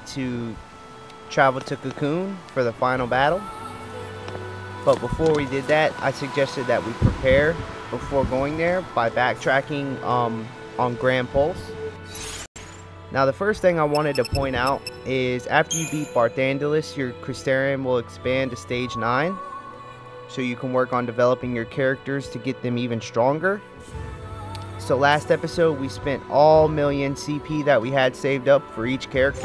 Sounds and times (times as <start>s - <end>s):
Speech: 0.0s - 0.6s, 1.3s - 3.5s, 4.9s - 11.7s, 13.1s - 19.4s, 20.3s - 23.6s, 24.8s - 29.4s
Music: 0.0s - 29.4s.